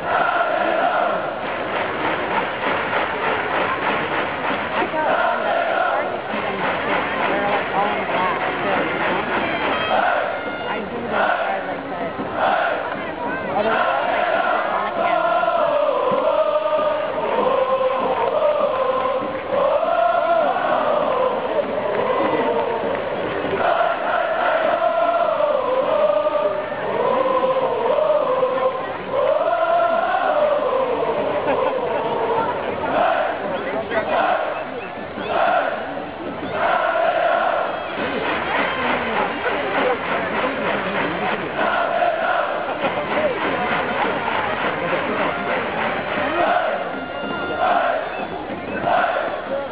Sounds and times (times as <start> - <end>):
Speech: 4.5 - 49.7.